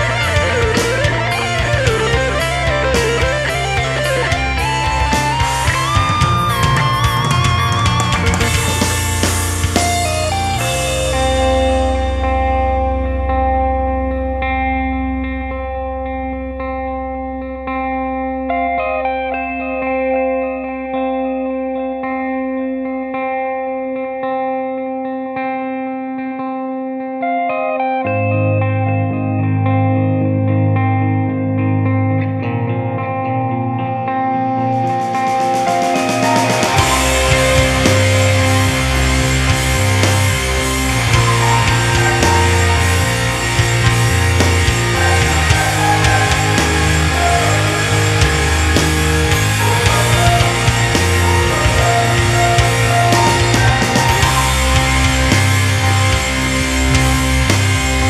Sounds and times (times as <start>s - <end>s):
Distortion: 0.0s - 58.1s
Effects unit: 0.0s - 58.1s
Music: 0.0s - 58.1s.